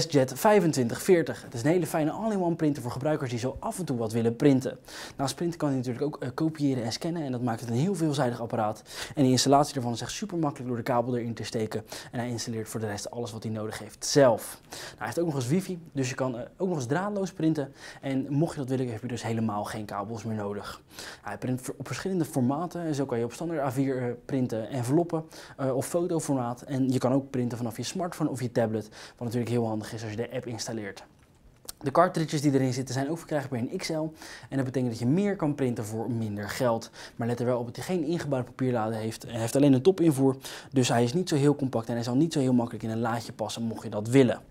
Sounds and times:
Speech: 0:00.0 - 0:44.5.

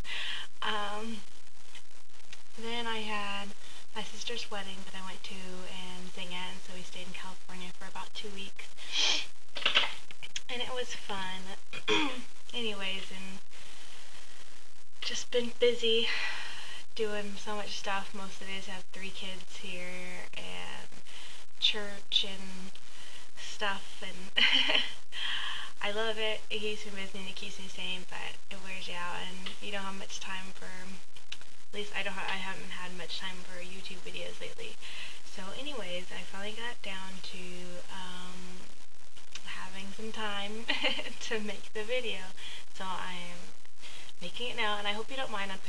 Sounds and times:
Speech: 0:00.0 - 0:01.2, 0:02.6 - 0:13.4, 0:15.0 - 0:20.9, 0:21.6 - 0:22.7, 0:23.4 - 0:24.9, 0:25.7 - 0:31.0, 0:31.8 - 0:38.6, 0:39.4 - 0:43.5, 0:44.2 - 0:45.6.

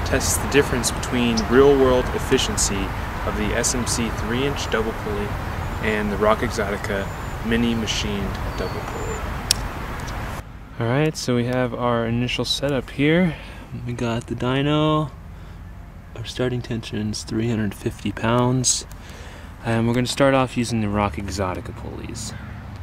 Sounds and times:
Speech: 0:00.0 - 0:09.0, 0:10.8 - 0:15.1, 0:16.2 - 0:18.9, 0:19.6 - 0:22.4.

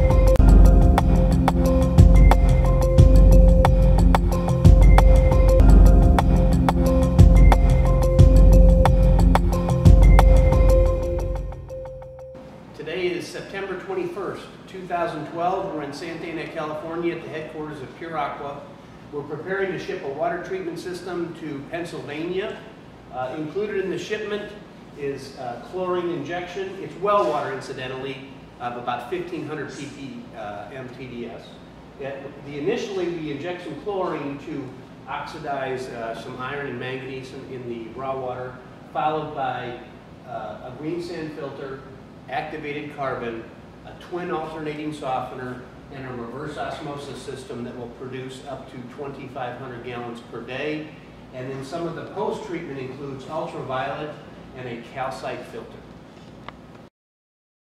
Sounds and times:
Music: 0:00.0 - 0:12.5
Speech: 0:12.8 - 0:55.8.

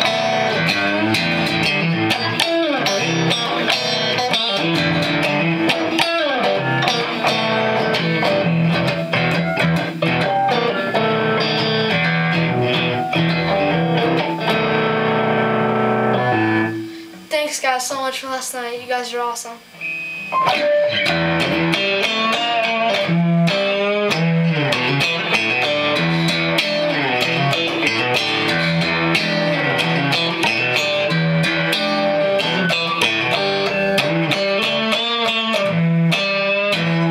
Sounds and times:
Electric guitar: 0:00.0 - 0:17.4, 0:19.6 - 0:37.1.

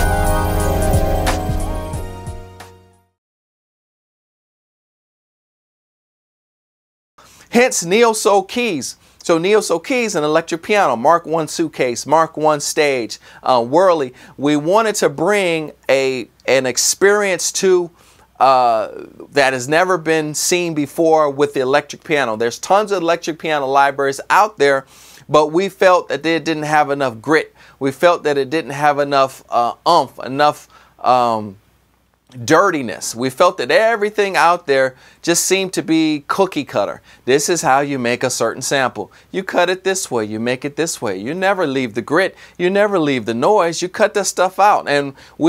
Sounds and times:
Speech: 0:07.5 - 0:31.6, 0:32.3 - 0:45.4.

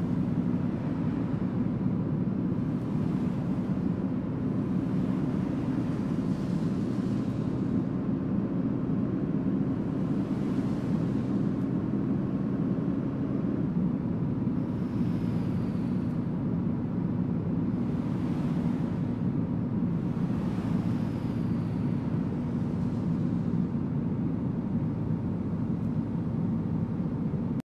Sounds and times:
Truck: 0:00.0 - 0:27.6.

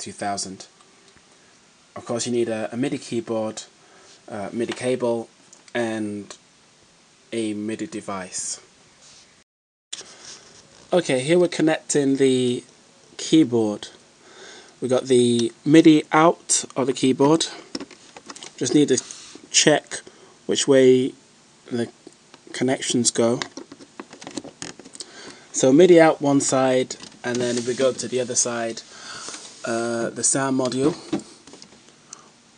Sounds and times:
Speech: 0:00.0 - 0:00.7, 0:02.0 - 0:03.7, 0:04.3 - 0:06.4, 0:07.3 - 0:08.7, 0:10.9 - 0:14.0, 0:14.8 - 0:17.7, 0:18.6 - 0:23.5, 0:25.5 - 0:28.9, 0:29.6 - 0:31.1.

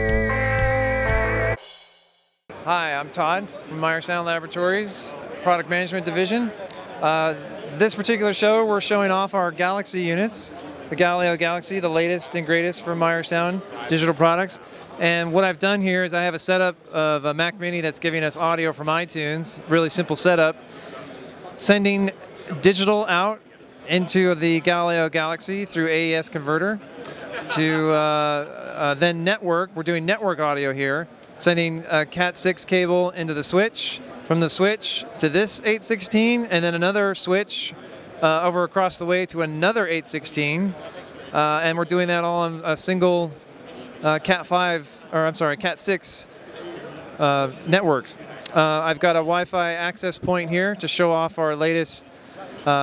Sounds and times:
Speech: 0:02.6 - 0:20.6, 0:21.2 - 0:43.4, 0:44.0 - 0:46.3, 0:46.9 - 0:52.8.

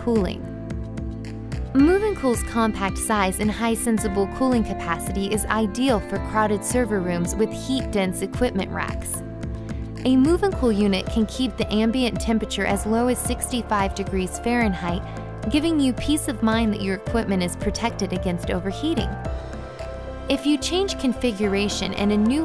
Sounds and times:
Speech: 0:00.0 - 0:00.5, 0:01.8 - 0:09.2, 0:10.0 - 0:19.2, 0:20.3 - 0:22.4
Music: 0:00.0 - 0:22.4.

